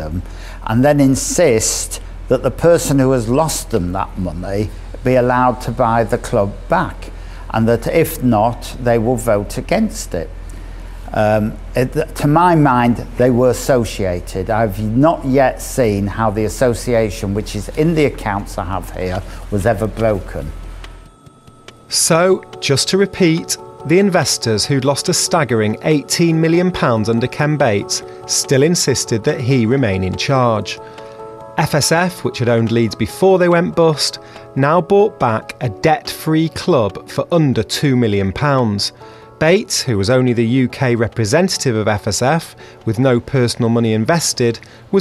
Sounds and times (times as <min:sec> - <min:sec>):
Speech: 0:00.0 - 0:10.3, 0:11.1 - 0:20.6, 0:21.9 - 0:30.8, 0:31.6 - 0:45.0
Music: 0:00.0 - 0:45.0.